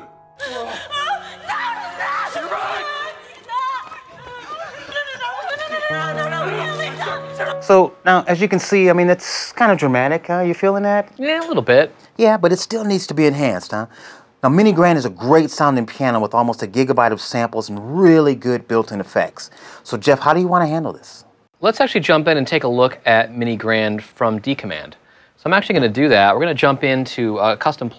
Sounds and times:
Music: 0.0 - 8.6
Speech: 7.6 - 27.9.

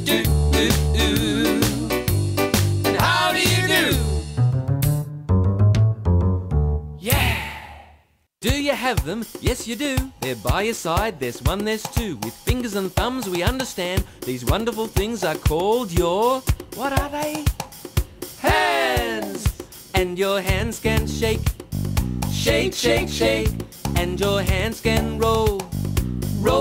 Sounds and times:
Music: 0.0 - 7.7, 8.4 - 26.6
Speech: 8.4 - 17.5, 18.4 - 21.4.

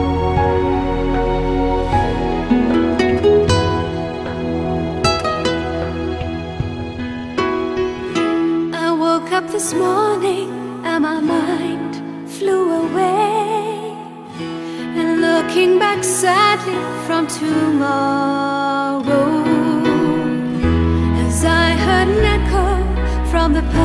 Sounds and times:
Music: 0.0 - 23.8.

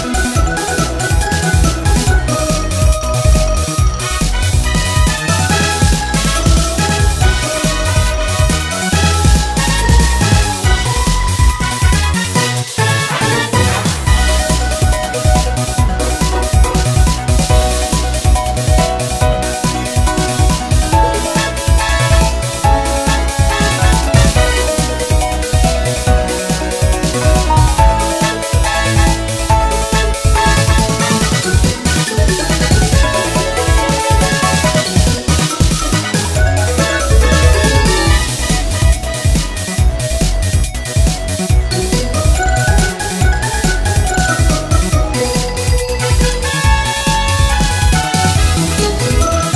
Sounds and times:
Music: 0.0 - 49.5.

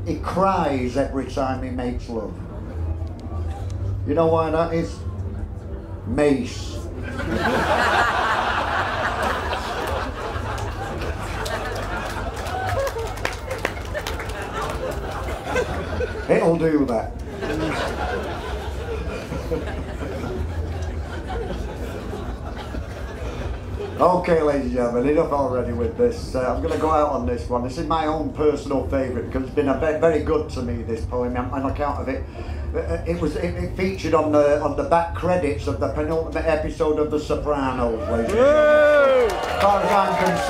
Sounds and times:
Speech: 0.0 - 2.4, 16.3 - 17.2, 24.0 - 32.2, 32.8 - 38.6, 39.6 - 40.5.

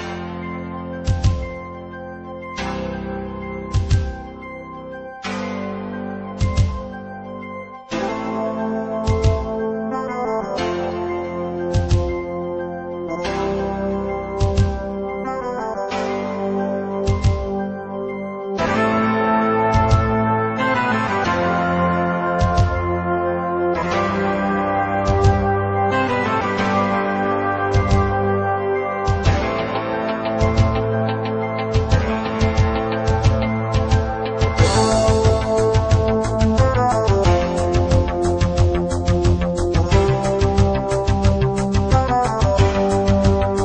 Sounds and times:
Theme music: 0.0 - 43.6.

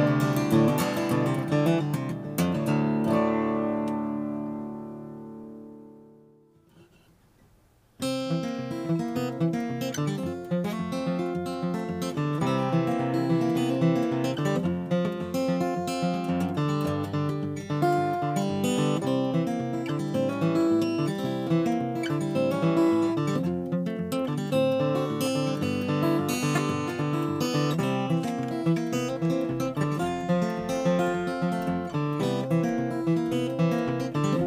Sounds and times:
Acoustic guitar: 0.0 - 34.4.

